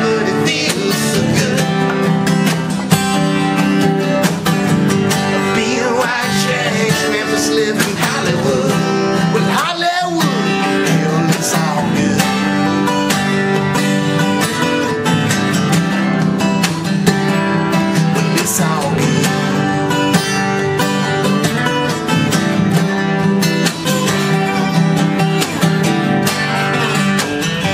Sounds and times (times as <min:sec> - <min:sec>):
Singing: 0:00.0 - 0:02.0, 0:05.4 - 0:12.8, 0:18.3 - 0:19.6
Music: 0:00.0 - 0:27.7.